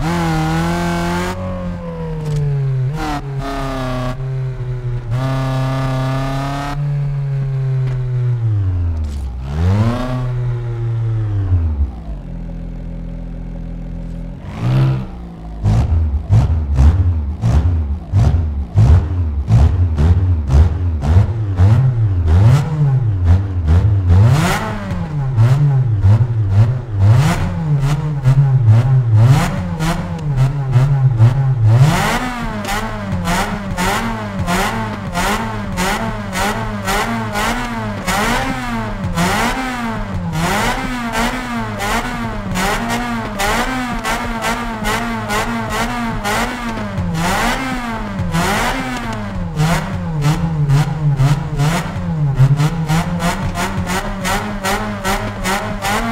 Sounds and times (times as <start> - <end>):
Accelerating, revving, vroom: 0.0 - 4.4, 5.1 - 7.1, 9.4 - 11.1, 14.4 - 56.1
Car: 0.0 - 56.1.